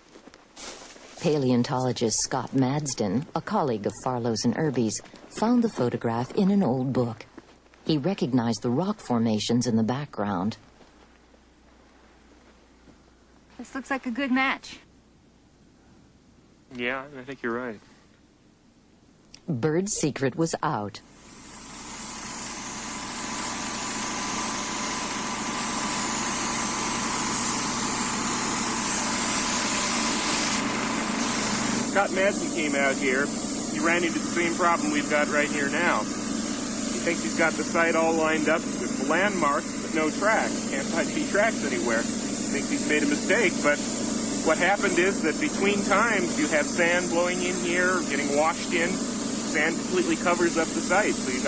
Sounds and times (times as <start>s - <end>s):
Engine: 21.0s - 51.4s.